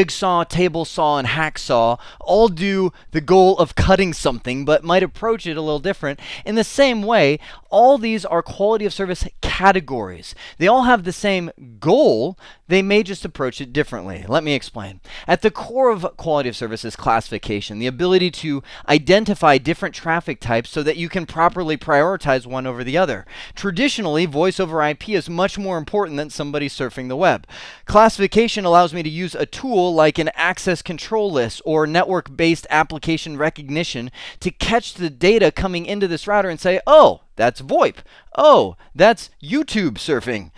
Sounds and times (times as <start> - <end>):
Speech: 0.0 - 40.5.